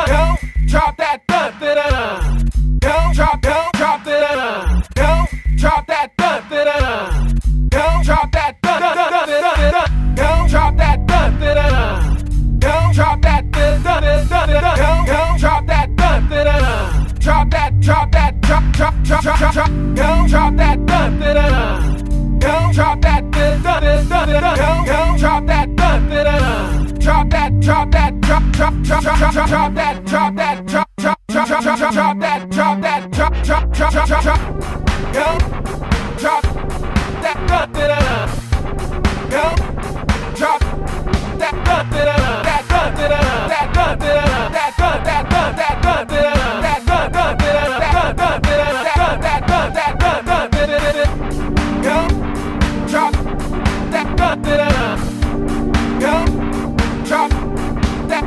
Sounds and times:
Electronic music: 9.6s - 58.2s.

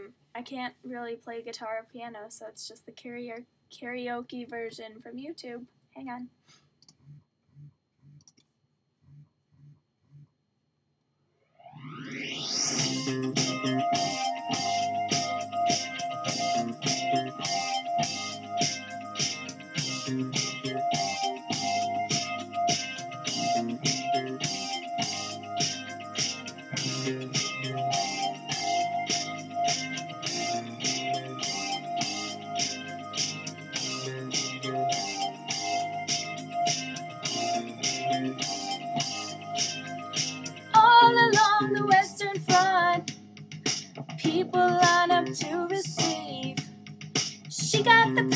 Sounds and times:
Music: 12.1s - 48.3s.

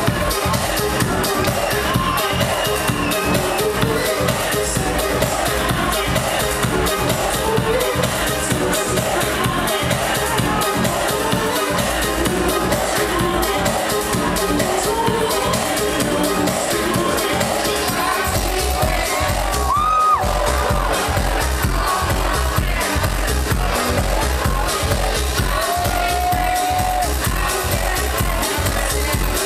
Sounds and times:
Music: 0.0s - 29.4s.

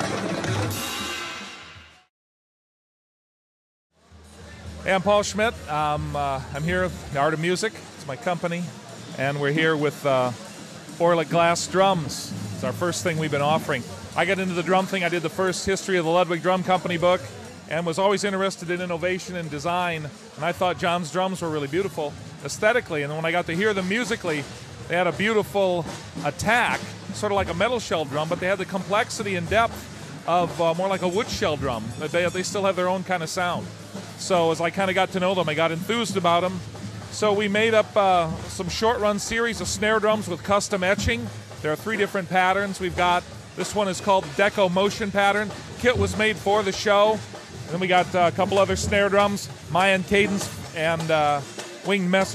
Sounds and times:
Drum: 0.0s - 2.1s, 4.1s - 52.3s
Drum kit: 0.0s - 2.1s, 4.1s - 52.3s
Speech: 4.2s - 52.3s.

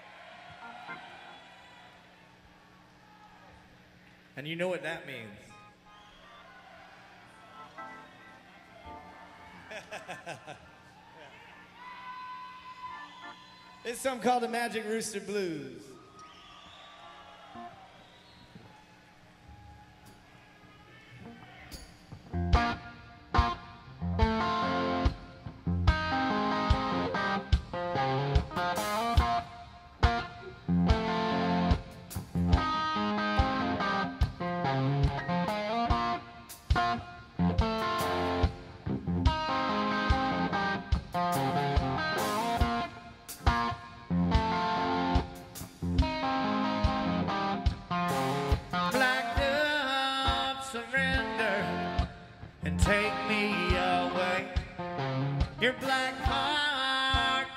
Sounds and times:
Speech: 4.4s - 5.5s, 13.9s - 16.0s
Music: 7.4s - 9.7s, 21.2s - 57.5s.

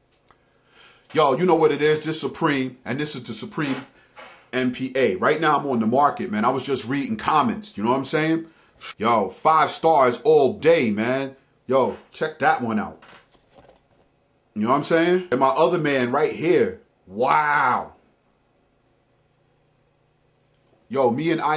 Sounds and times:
Speech: 1.1s - 3.9s, 4.5s - 13.0s, 14.6s - 18.0s, 20.9s - 21.5s.

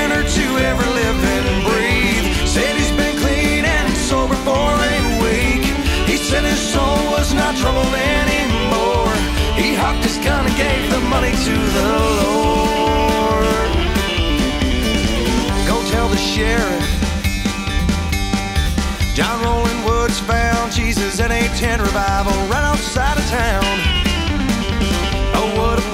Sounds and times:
Background music: 0.0s - 25.9s
Blues: 0.0s - 25.9s.

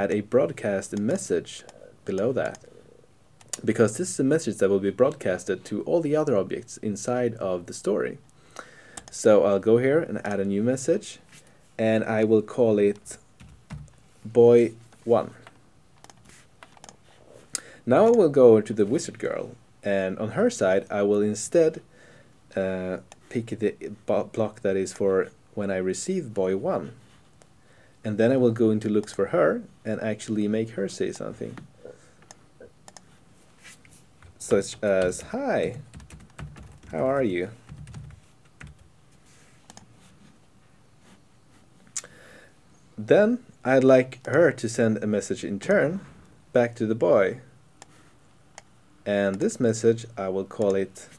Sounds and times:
Speech: 0.0s - 2.6s, 3.6s - 8.2s, 9.1s - 11.2s, 11.8s - 13.2s, 14.2s - 15.5s, 17.8s - 21.8s, 22.5s - 27.0s, 28.0s - 31.7s, 34.4s - 35.9s, 36.9s - 37.6s, 43.0s - 47.5s, 49.0s - 51.1s.

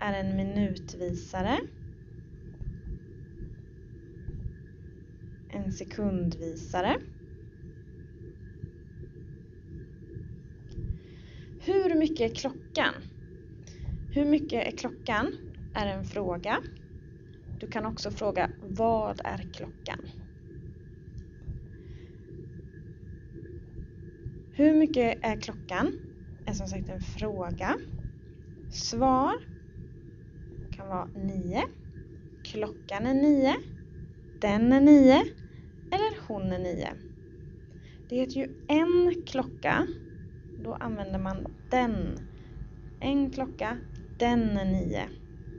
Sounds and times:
Speech: 0.0s - 1.7s, 5.5s - 7.1s, 11.6s - 13.1s, 14.2s - 16.7s, 17.6s - 20.1s, 24.6s - 27.9s, 28.8s - 29.4s, 30.8s - 31.7s, 32.5s - 33.7s, 34.4s - 35.4s, 36.0s - 37.0s, 38.1s - 40.0s, 40.6s - 42.3s, 43.0s - 45.2s.

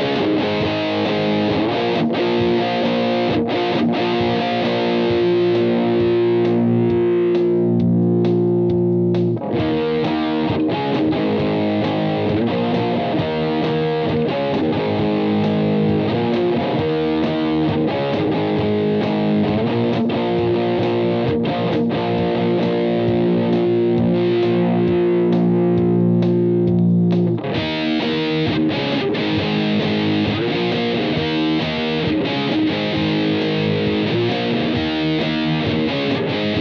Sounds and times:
Effects unit: 0.0s - 36.6s
Electric guitar: 0.0s - 36.6s.

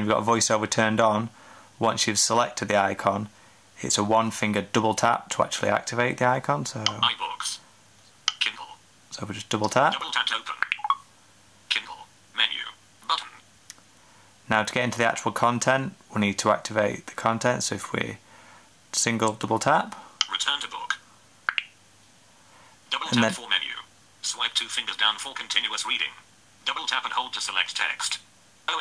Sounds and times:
Speech synthesizer: 6.4s - 7.6s, 8.3s - 10.7s, 11.7s - 13.4s, 20.2s - 21.0s, 22.9s - 28.8s.

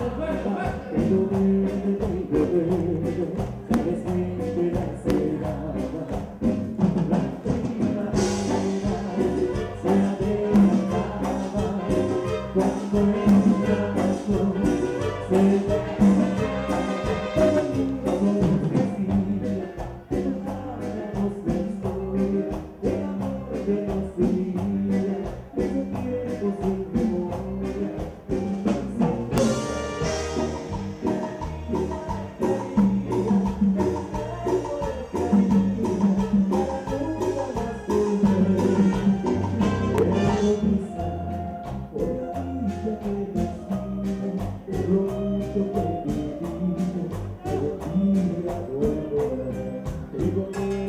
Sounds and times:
Music: 0.0s - 50.8s.

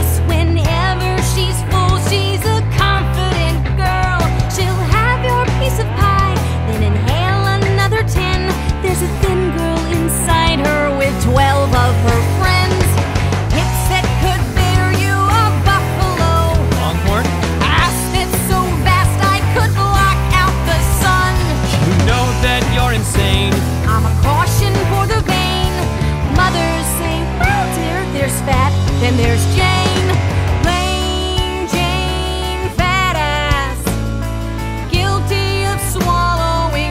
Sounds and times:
Music: 0.0s - 36.9s.

